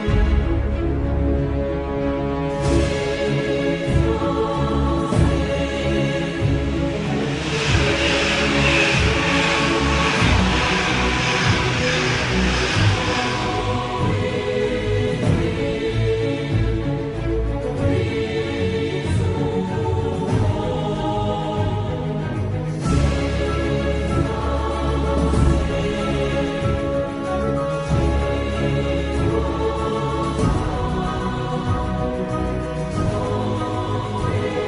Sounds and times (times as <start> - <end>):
Music: 0.0 - 34.6.